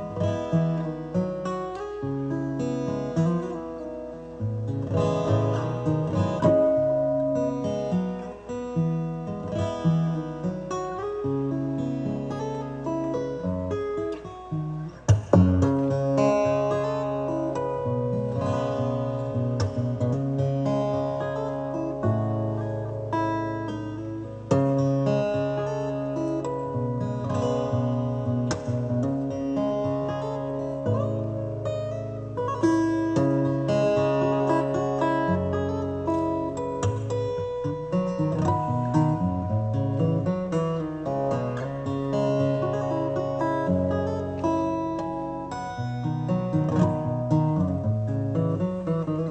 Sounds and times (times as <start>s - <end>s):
Acoustic guitar: 0.0s - 49.3s
Strum: 0.0s - 49.3s.